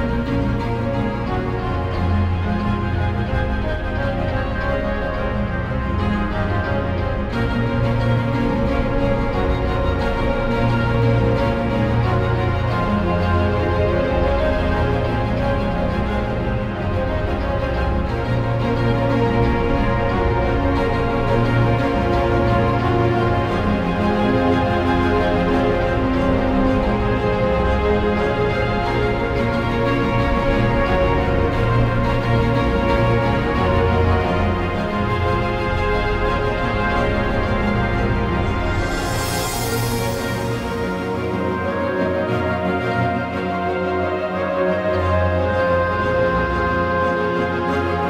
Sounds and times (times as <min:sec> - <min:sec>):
Music: 0:00.0 - 0:48.1.